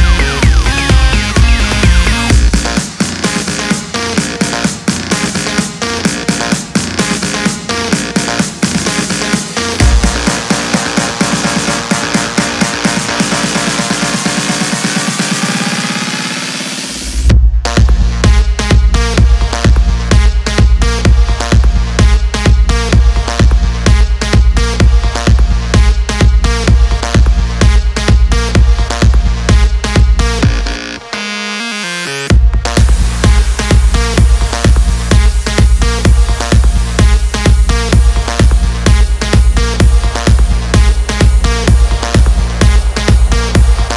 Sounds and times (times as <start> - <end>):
Electronic dance music: 0.0 - 43.9.